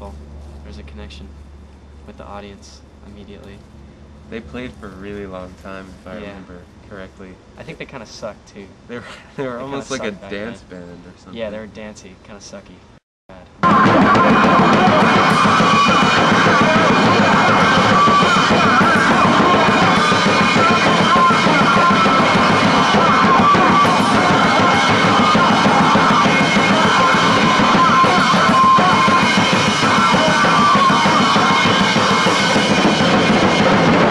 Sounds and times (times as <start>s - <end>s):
Music: 13.6s - 34.1s.